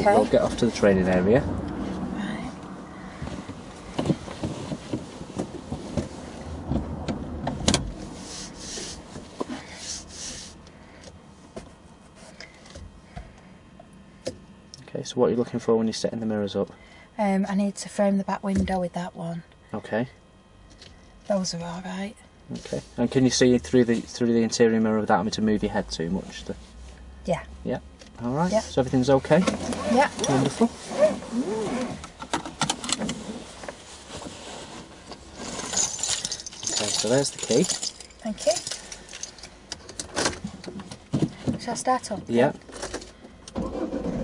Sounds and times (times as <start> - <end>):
Car: 0.0 - 11.7, 25.5 - 44.2.